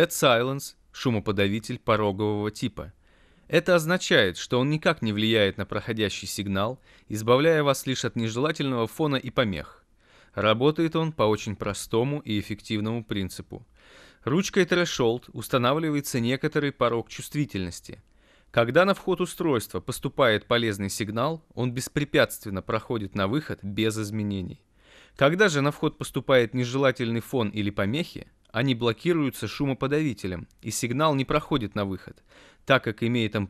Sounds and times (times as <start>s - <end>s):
Speech: 0.0s - 9.8s, 10.4s - 18.0s, 18.6s - 24.6s, 25.2s - 33.4s.